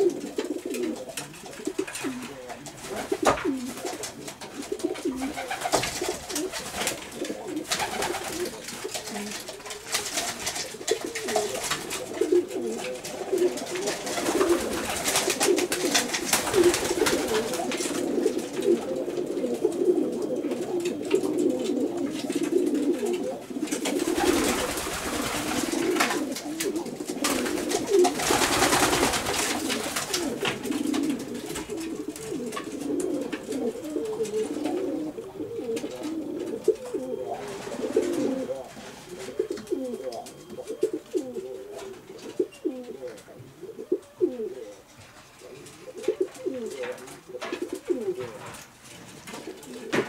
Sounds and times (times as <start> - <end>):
Pigeon, dove: 0.0 - 50.0.